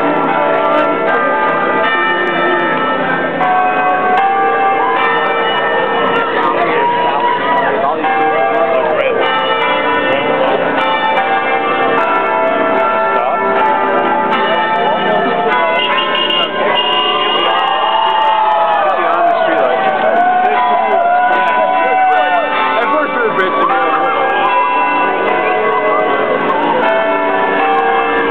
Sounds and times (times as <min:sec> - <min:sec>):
Crowd: 0:00.0 - 0:28.3.